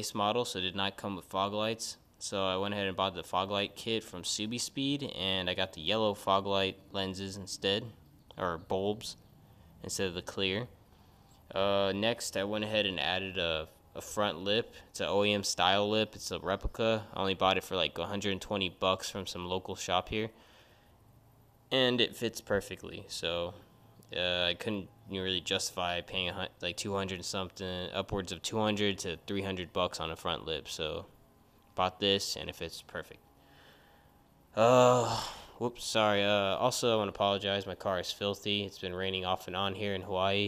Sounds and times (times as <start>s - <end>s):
Speech: 0.0s - 9.2s, 9.8s - 10.8s, 11.5s - 20.4s, 21.7s - 31.1s, 31.8s - 33.2s, 35.6s - 40.4s.